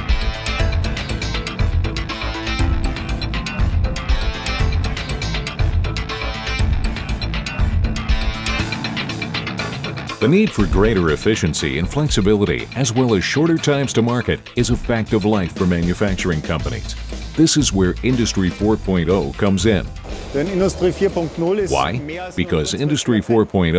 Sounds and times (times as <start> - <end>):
Music: 0.0 - 23.7
Speech: 10.2 - 23.7.